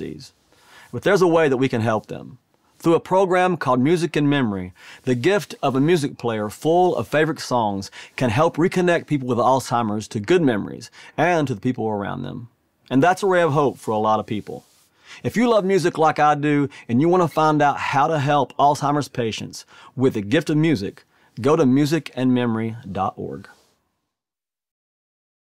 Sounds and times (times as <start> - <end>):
Speech: 0.0 - 0.3, 0.9 - 23.6.